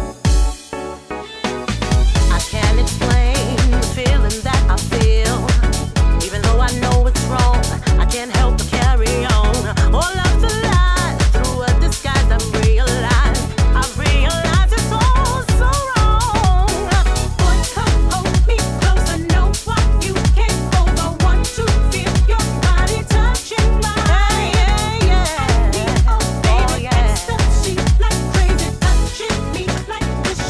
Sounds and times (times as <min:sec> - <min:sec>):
Disco: 0:00.0 - 0:30.4.